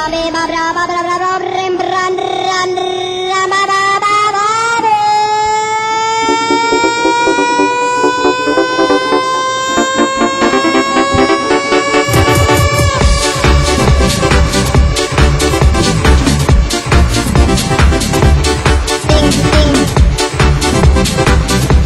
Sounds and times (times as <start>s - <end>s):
Music: 6.2s - 21.8s.